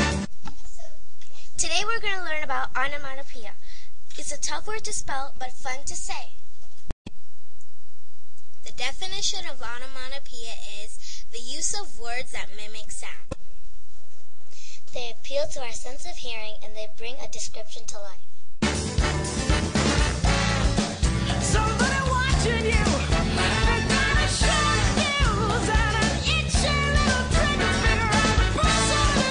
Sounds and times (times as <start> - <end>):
Music: 0.0 - 0.3, 18.6 - 29.3
Speech: 1.6 - 6.4, 8.6 - 13.3, 14.9 - 18.2.